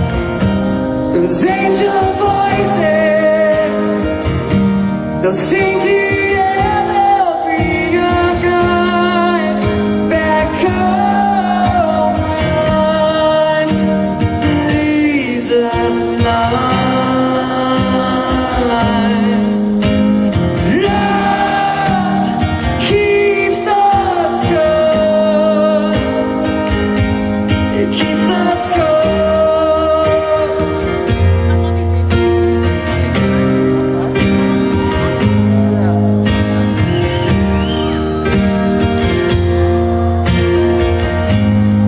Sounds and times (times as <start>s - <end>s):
Inside, large room or hall: 0.0s - 41.8s
Music: 0.0s - 41.8s
Singing: 5.2s - 13.9s.